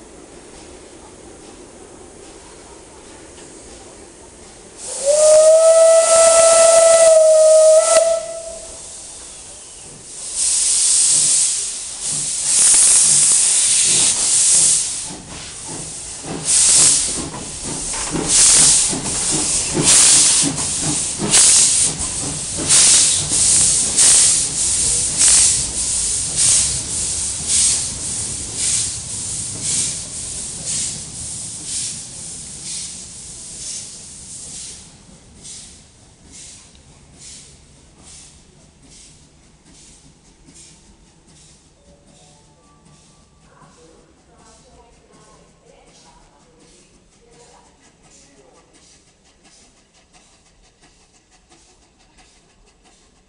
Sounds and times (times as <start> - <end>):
Hiss: 0.0 - 53.2.